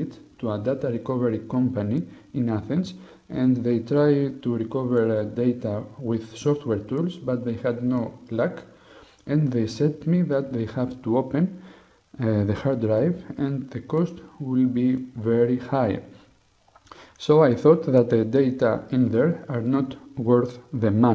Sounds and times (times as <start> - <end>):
Speech: 0.0 - 16.2, 17.2 - 21.1.